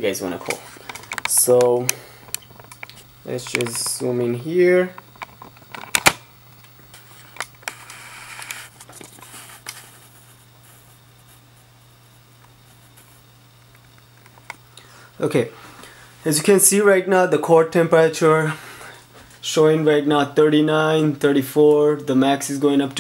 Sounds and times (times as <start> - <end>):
Speech: 0.0 - 0.6, 1.3 - 2.0, 3.2 - 5.0, 15.2 - 15.6, 16.2 - 18.6, 19.4 - 23.0
Inside, small room: 0.0 - 23.0.